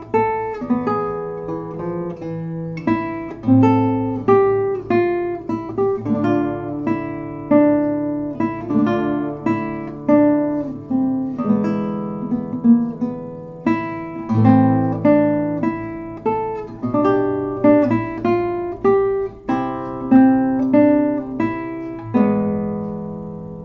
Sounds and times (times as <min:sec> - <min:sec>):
Acoustic guitar: 0:00.0 - 0:23.6.